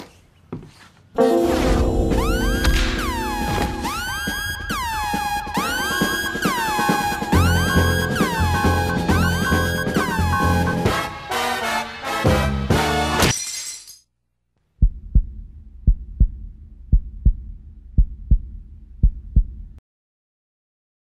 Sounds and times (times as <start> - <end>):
Music: 1.2 - 13.2.